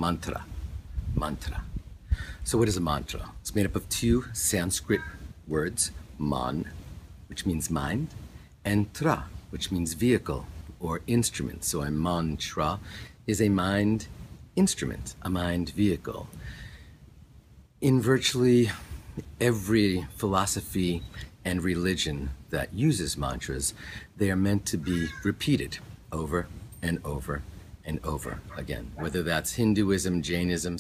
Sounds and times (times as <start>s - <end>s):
Speech: 0.0s - 0.5s, 1.2s - 1.7s, 2.5s - 6.7s, 7.3s - 16.3s, 17.8s - 30.8s.